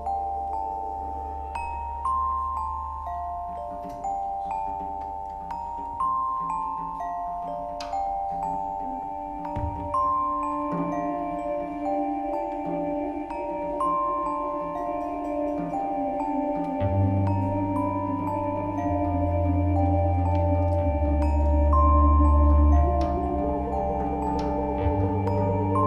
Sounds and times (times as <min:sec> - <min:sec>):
Jingle, tinkle: 0:00.0 - 0:25.8.